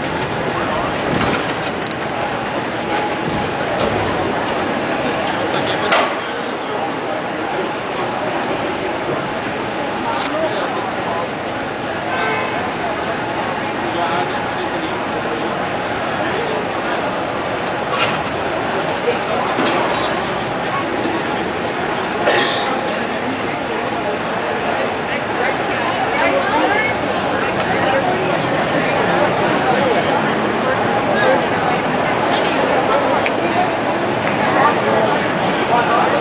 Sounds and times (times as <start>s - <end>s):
Speech: 0.0s - 36.2s.